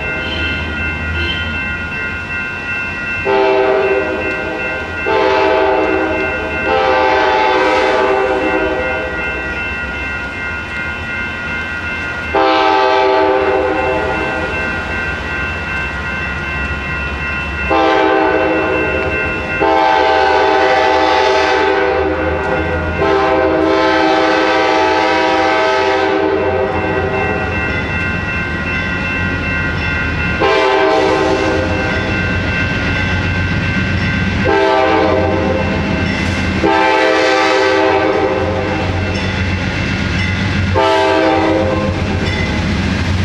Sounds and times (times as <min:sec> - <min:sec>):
Railroad car, train wagon: 0:00.0 - 0:43.2
Train horn: 0:03.2 - 0:09.2, 0:12.4 - 0:14.5, 0:17.7 - 0:26.8, 0:30.4 - 0:31.9, 0:34.4 - 0:35.8, 0:36.6 - 0:39.0, 0:40.7 - 0:42.2.